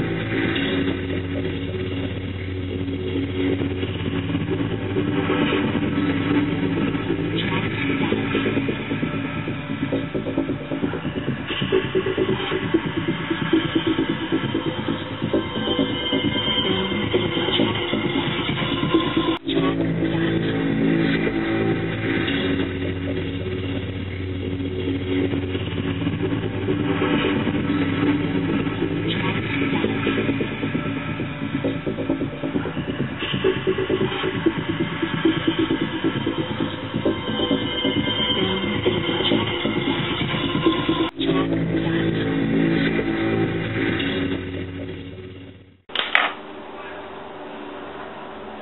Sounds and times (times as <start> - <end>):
Music: 0.0 - 47.0.